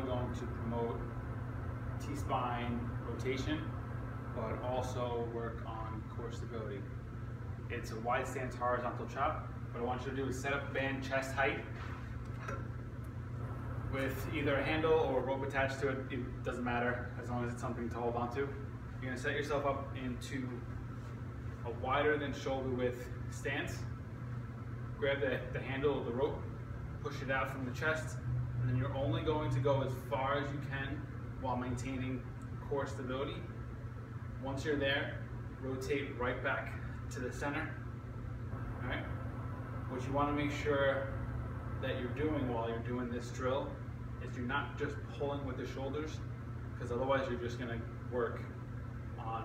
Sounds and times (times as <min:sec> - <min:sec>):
Speech: 0:00.0 - 0:01.1, 0:02.0 - 0:03.7, 0:04.4 - 0:06.9, 0:07.7 - 0:11.8, 0:13.9 - 0:20.7, 0:21.6 - 0:23.9, 0:25.0 - 0:33.6, 0:34.4 - 0:37.8, 0:38.8 - 0:39.1, 0:39.9 - 0:41.2, 0:41.8 - 0:48.6, 0:49.2 - 0:49.4.